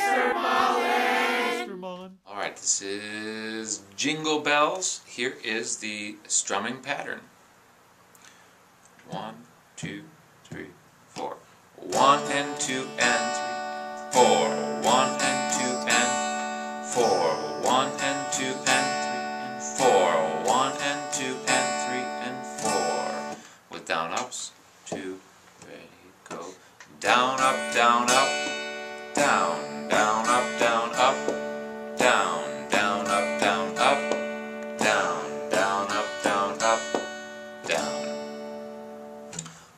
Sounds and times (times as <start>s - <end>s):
Speech: 1.6s - 7.3s, 9.0s - 12.0s, 23.7s - 26.6s
Strum: 11.8s - 23.5s, 27.0s - 39.7s
Acoustic guitar: 11.8s - 24.3s, 26.3s - 39.7s.